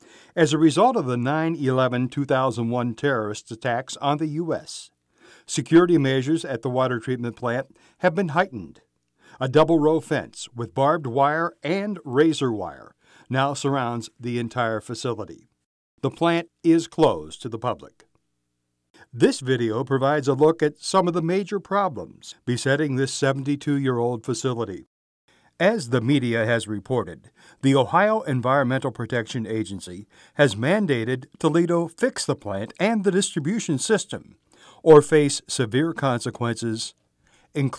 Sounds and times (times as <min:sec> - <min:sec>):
Speech: 0:00.4 - 0:18.1, 0:19.1 - 0:24.9, 0:25.6 - 0:37.0, 0:37.6 - 0:37.7.